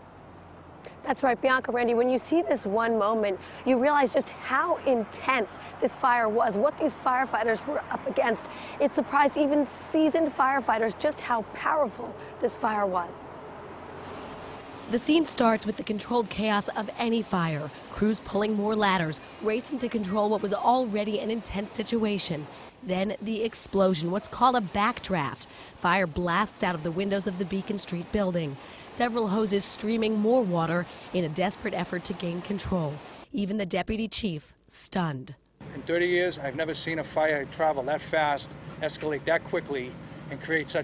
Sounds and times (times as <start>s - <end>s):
Speech: 1.0s - 13.1s, 14.9s - 40.8s.